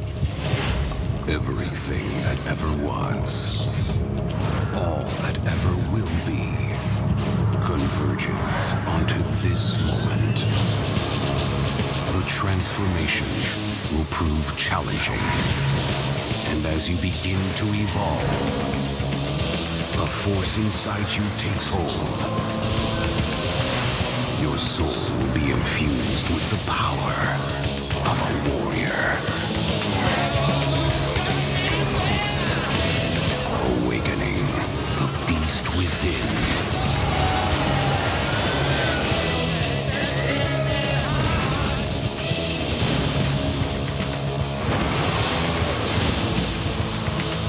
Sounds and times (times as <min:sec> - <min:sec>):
Speech: 0:01.2 - 0:03.9, 0:04.7 - 0:06.9, 0:07.6 - 0:10.6, 0:12.1 - 0:15.5, 0:16.4 - 0:18.7, 0:20.0 - 0:22.5, 0:24.4 - 0:29.5, 0:33.5 - 0:36.6.